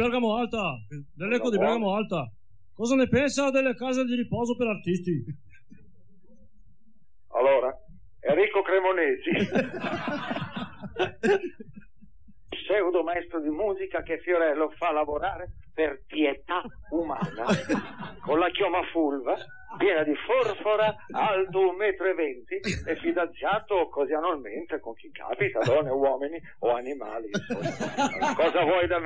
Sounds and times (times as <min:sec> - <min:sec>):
Speech: 0:07.3 - 0:09.7, 0:12.5 - 0:27.5, 0:28.1 - 0:29.0.